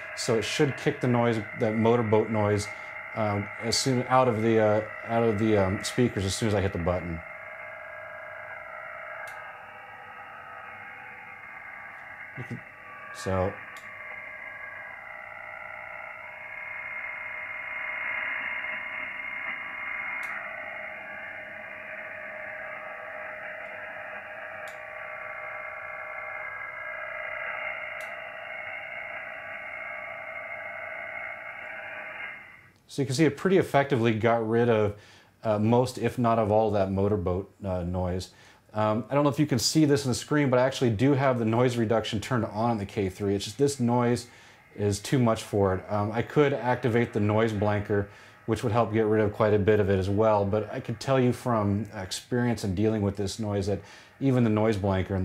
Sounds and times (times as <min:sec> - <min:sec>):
Radio: 0:00.0 - 0:10.7, 0:11.6 - 0:14.9, 0:38.8 - 0:55.2.